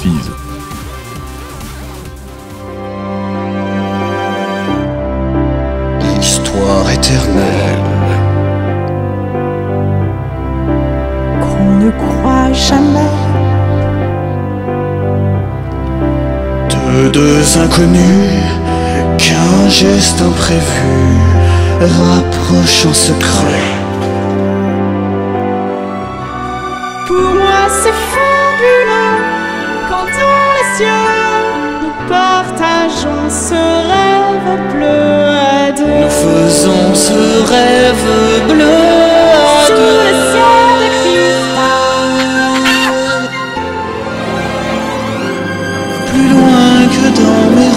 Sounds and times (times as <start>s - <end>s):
Speech: 0.0s - 0.4s
Music: 0.0s - 47.7s.